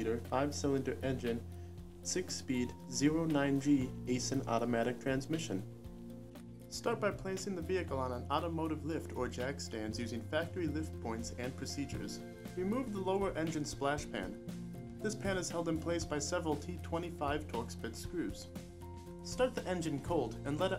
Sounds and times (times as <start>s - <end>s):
Speech: 0.0s - 1.4s, 2.1s - 5.6s, 6.7s - 14.4s, 15.0s - 18.5s, 19.2s - 20.7s
Music: 0.0s - 20.7s.